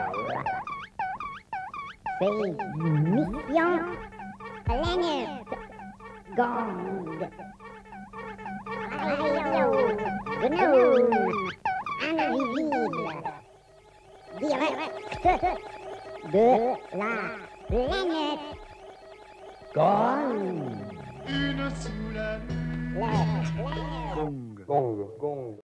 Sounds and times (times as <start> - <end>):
Speech: 2.2 - 4.0, 4.7 - 5.6, 6.3 - 7.3, 8.9 - 13.4, 19.8 - 22.2, 23.0 - 25.6
Radio: 2.2 - 7.4, 8.8 - 13.4, 14.2 - 24.4
Music: 2.2 - 24.3.